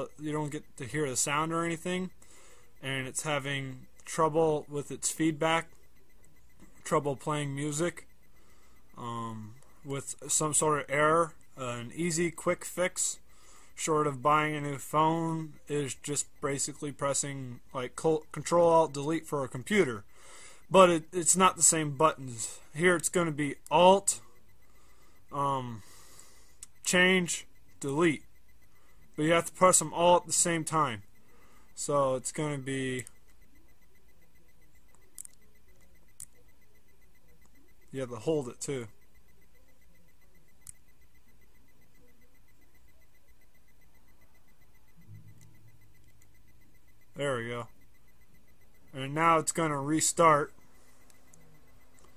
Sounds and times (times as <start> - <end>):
Speech: 0.0 - 2.1, 2.8 - 5.7, 6.8 - 8.0, 9.0 - 13.2, 13.8 - 20.0, 20.7 - 24.3, 25.3 - 25.8, 26.8 - 28.2, 29.2 - 31.0, 31.8 - 33.1, 37.9 - 38.9, 47.2 - 47.7, 48.9 - 50.5.